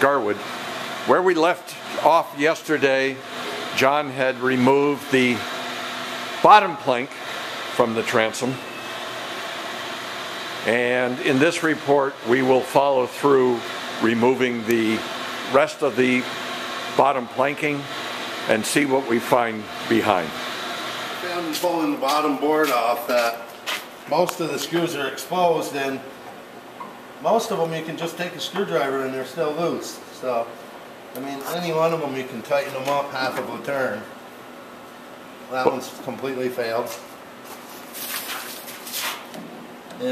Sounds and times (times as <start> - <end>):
Speech: 0.0 - 0.4, 1.1 - 3.2, 3.8 - 5.4, 6.4 - 7.1, 7.8 - 8.6, 10.6 - 16.3, 17.0 - 17.9, 18.5 - 20.4, 21.2 - 23.5, 24.1 - 26.1, 27.2 - 30.6, 31.2 - 34.2, 35.5 - 37.1.